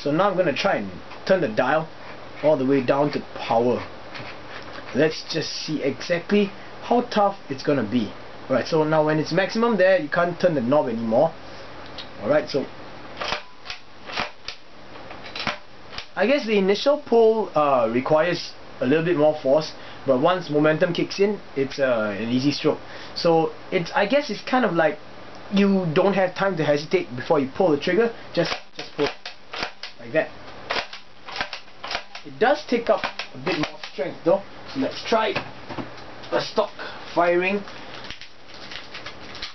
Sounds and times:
Speech: 0.0 - 3.9, 4.9 - 11.4, 12.2 - 12.7, 16.2 - 29.2, 30.0 - 30.4, 32.2 - 35.5, 36.3 - 37.7
Inside, small room: 0.0 - 39.5.

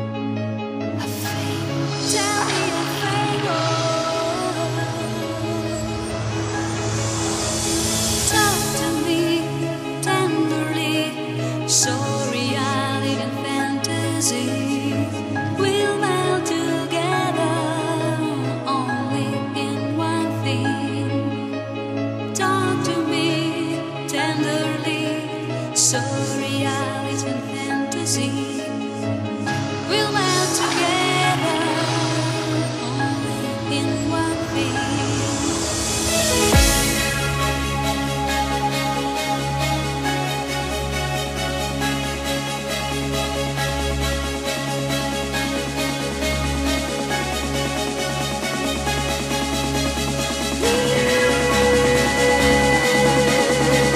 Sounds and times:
Trance music: 0.0 - 53.9.

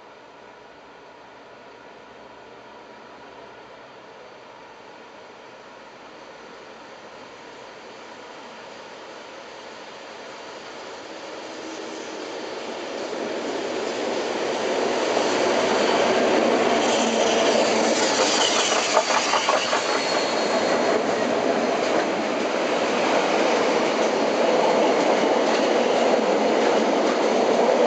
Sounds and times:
Hiss: 6.7 - 25.8.

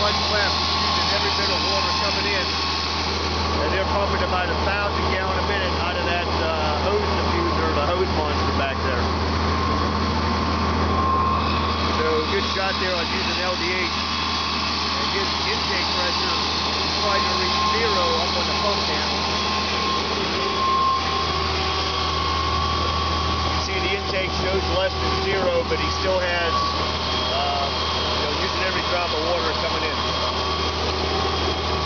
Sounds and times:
Speech: 0.0 - 2.6, 3.6 - 9.1, 11.9 - 14.0, 15.0 - 19.2, 23.6 - 26.6, 27.3 - 30.1
Medium engine (mid frequency): 0.0 - 31.8
Vehicle: 0.0 - 31.8.

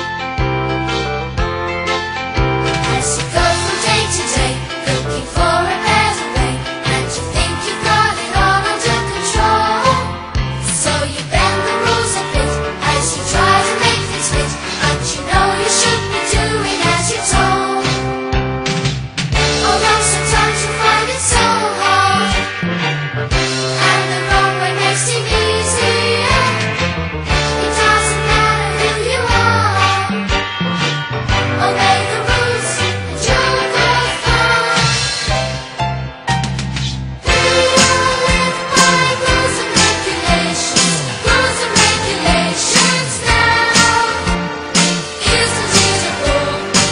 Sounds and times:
Music: 0.0 - 46.9.

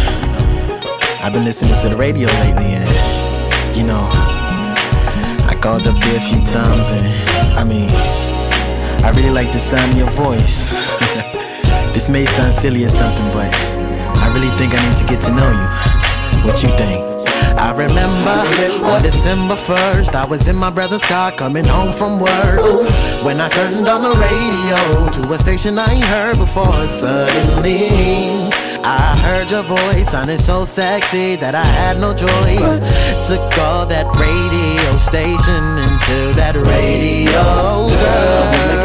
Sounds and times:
Music: 0.0 - 38.8.

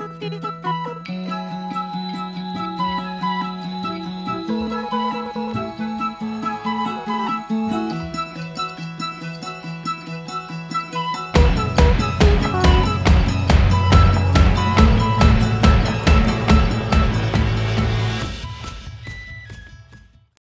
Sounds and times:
Music: 0.0 - 20.4.

